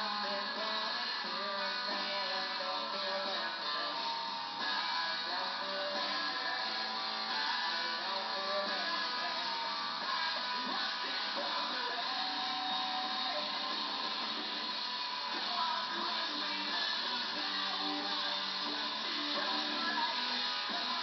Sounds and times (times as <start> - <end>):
Music: 0.0 - 21.0.